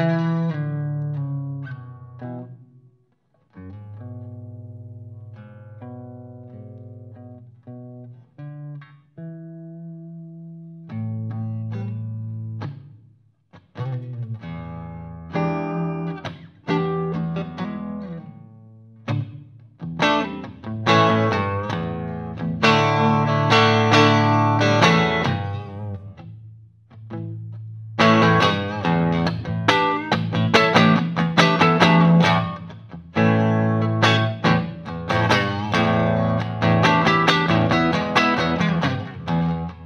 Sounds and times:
Guitar: 0.0 - 39.8.

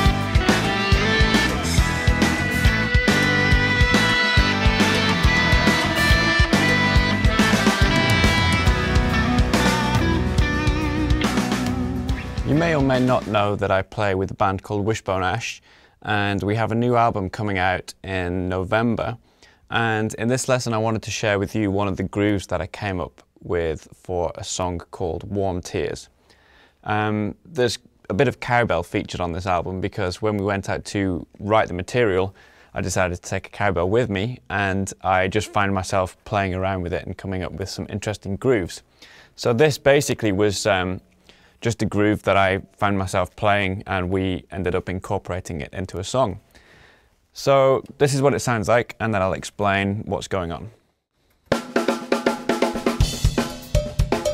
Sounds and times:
Speech: 12.4 - 26.1, 26.8 - 41.0, 41.6 - 46.4, 47.4 - 50.8.

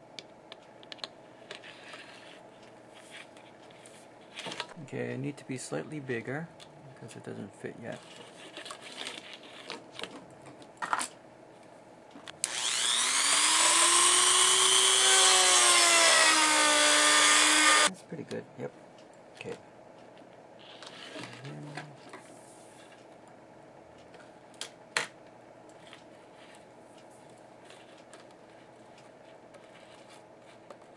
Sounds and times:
Inside, small room: 0.0 - 30.9
Speech: 4.8 - 8.0, 17.9 - 18.8, 19.4 - 19.6, 21.2 - 22.0.

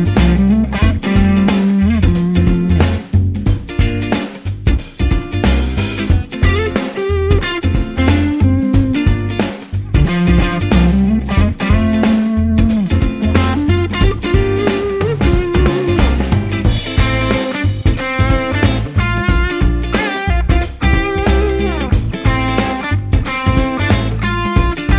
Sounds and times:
Bass guitar: 0.0 - 24.9
Electric guitar: 0.0 - 24.9
Strum: 4.9 - 24.9.

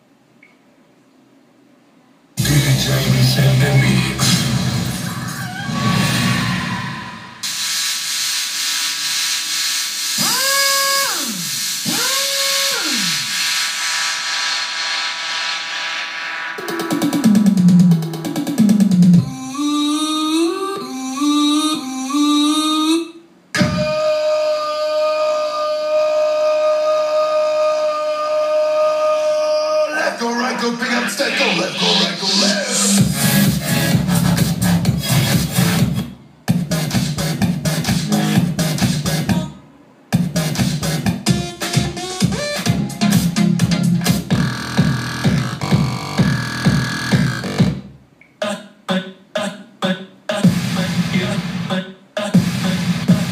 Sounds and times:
Music: 2.4 - 6.5, 12.6 - 19.9, 23.6 - 24.1, 31.8 - 39.6, 40.2 - 47.9, 50.4 - 51.6, 52.3 - 53.3.

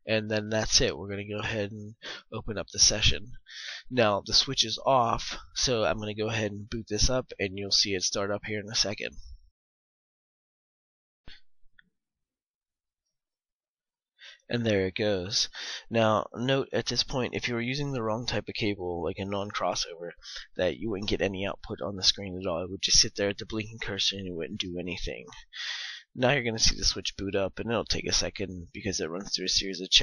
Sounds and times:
Speech: 0.0 - 9.3, 14.5 - 30.0.

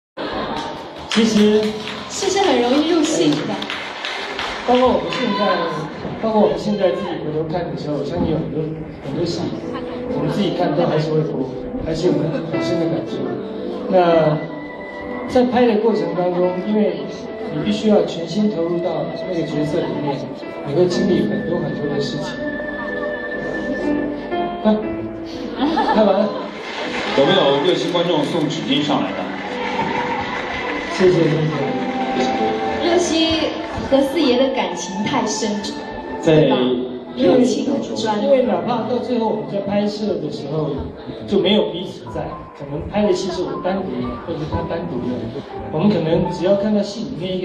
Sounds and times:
Music: 0.2 - 47.4.

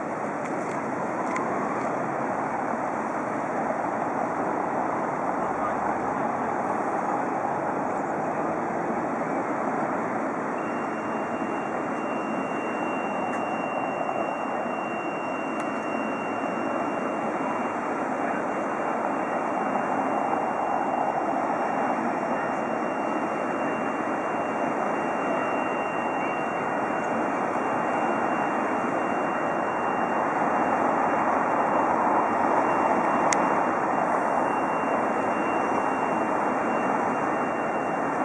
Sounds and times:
Vehicle: 0.0 - 38.2.

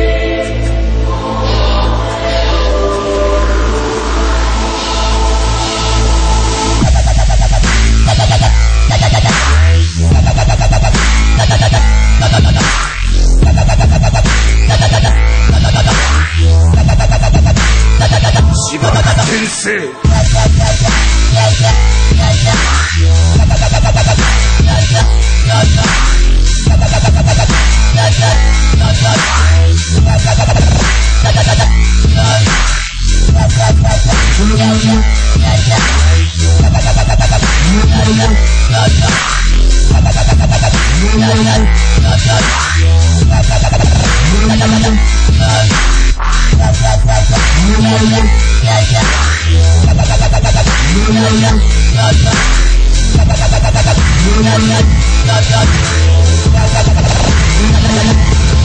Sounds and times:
Dubstep: 0.2 - 58.6.

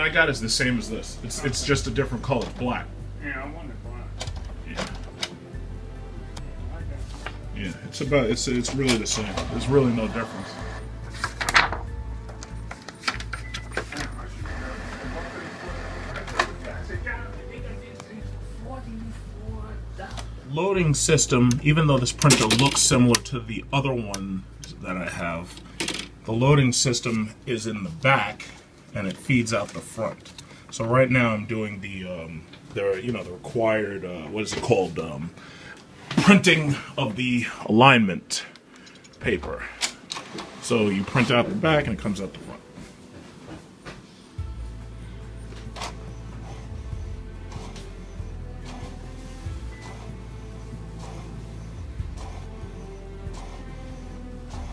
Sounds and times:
Speech: 0.0 - 4.1, 6.7 - 10.6, 16.2 - 25.5, 26.3 - 35.3, 39.2 - 39.8, 40.6 - 42.6
Music: 0.0 - 31.9, 39.0 - 54.7
Printer: 8.9 - 11.4, 13.0 - 16.8, 40.2 - 41.4, 45.6 - 54.7.

